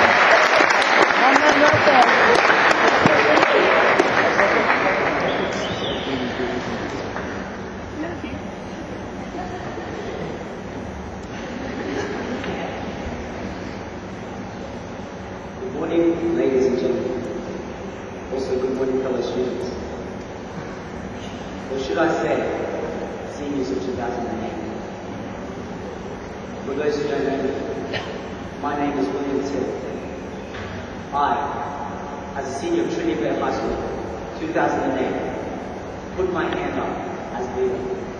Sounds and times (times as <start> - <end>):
Male speech, man speaking: 2.8 - 7.0, 15.6 - 17.2, 18.3 - 19.8, 21.7 - 22.6, 23.3 - 24.6, 26.7 - 27.6, 28.6 - 29.9, 31.1 - 31.6, 32.4 - 35.3, 36.2 - 38.0
Narration, monologue: 26.4 - 38.1.